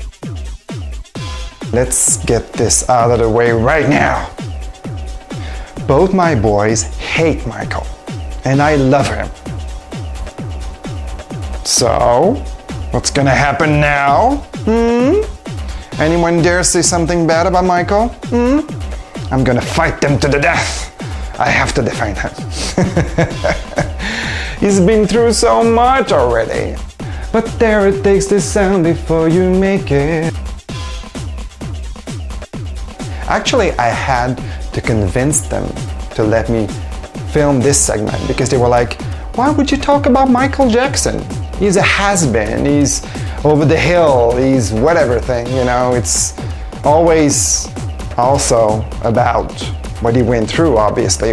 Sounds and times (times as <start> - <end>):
Music: 0.0 - 51.3
Speech: 1.7 - 4.4, 5.8 - 9.3, 11.6 - 12.4, 13.0 - 15.3, 16.0 - 18.7, 19.3 - 22.4, 24.6 - 30.4, 33.3 - 51.3.